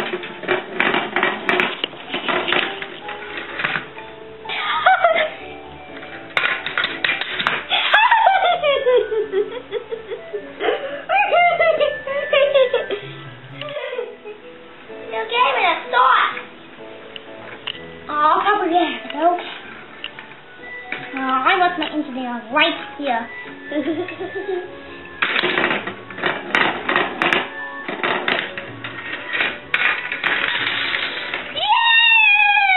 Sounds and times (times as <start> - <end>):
Music: 0.0 - 32.7.